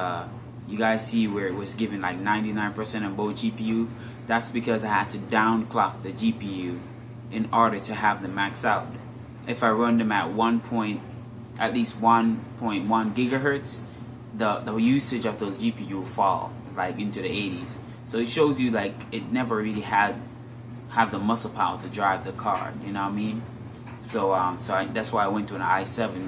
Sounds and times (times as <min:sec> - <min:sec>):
Speech: 0:00.0 - 0:13.8, 0:14.4 - 0:20.3, 0:20.9 - 0:26.2
Inside, small room: 0:00.0 - 0:26.2.